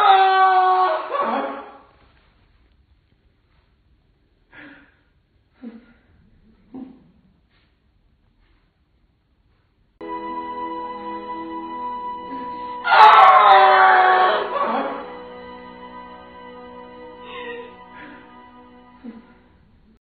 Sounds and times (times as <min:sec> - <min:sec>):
Music: 0:10.0 - 0:20.0.